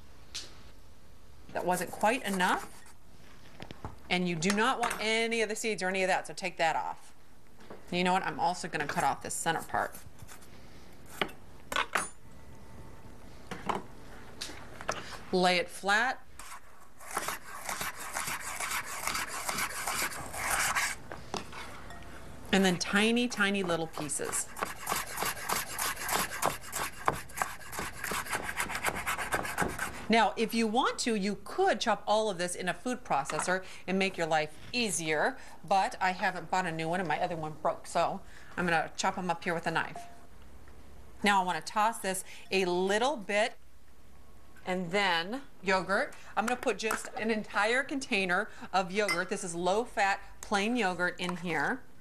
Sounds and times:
Speech: 1.5s - 2.7s, 4.1s - 7.1s, 7.9s - 10.0s, 22.5s - 24.4s, 30.1s - 40.0s, 41.2s - 43.6s, 44.6s - 51.8s.

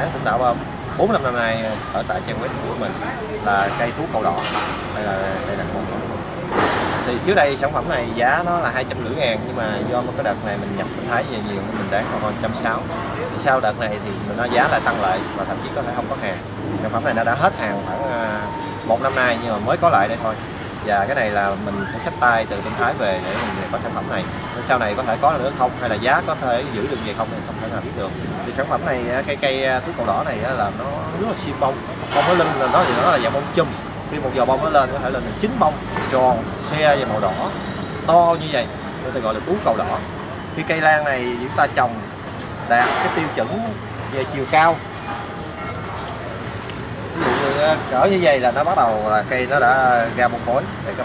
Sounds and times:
Speech: 0.0s - 44.9s, 47.2s - 51.0s.

